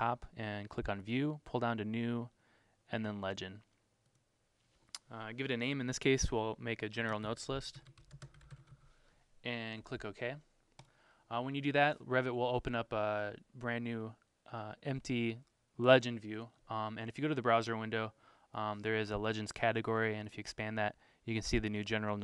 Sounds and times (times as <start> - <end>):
Speech: 0.0 - 3.7, 5.0 - 7.8, 9.4 - 10.5, 11.3 - 22.2.